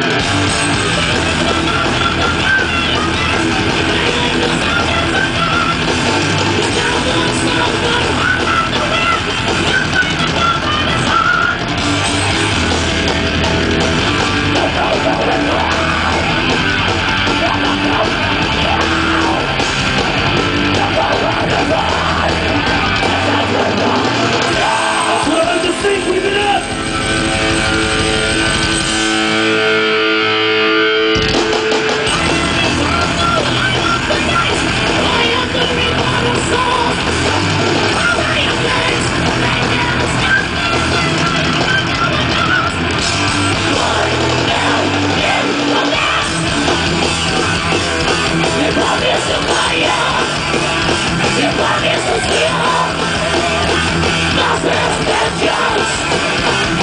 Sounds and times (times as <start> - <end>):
Music: 0.0 - 56.8
Speech: 25.2 - 26.7.